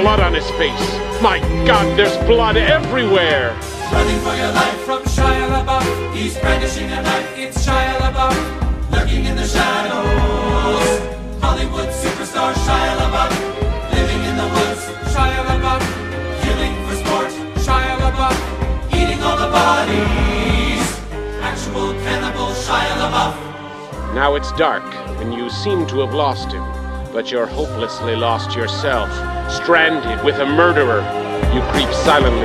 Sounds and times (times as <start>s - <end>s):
Music: 0.0s - 32.4s.